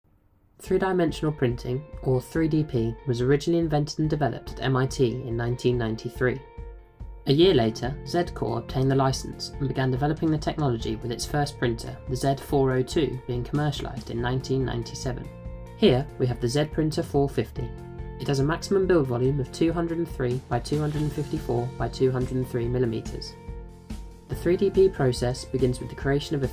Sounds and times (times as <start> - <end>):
Speech: 0.6 - 6.5, 7.3 - 23.4, 24.3 - 26.5
Music: 0.6 - 26.5.